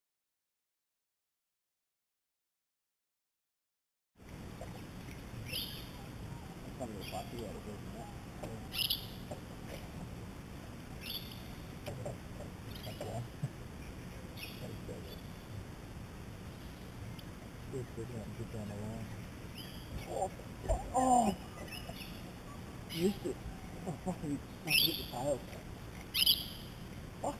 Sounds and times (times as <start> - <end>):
Chirp, tweet: 5.5 - 6.0, 8.7 - 9.3, 11.0 - 11.5, 13.8 - 15.4, 19.0 - 20.1.